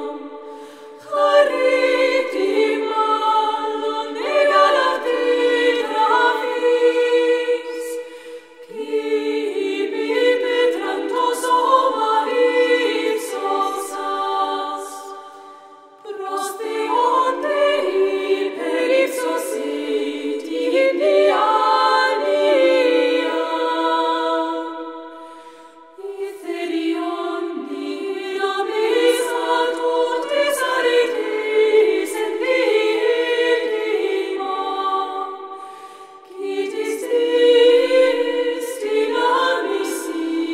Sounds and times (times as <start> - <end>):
Mantra: 0.0 - 8.1, 8.7 - 25.2, 26.0 - 35.6, 36.2 - 40.5.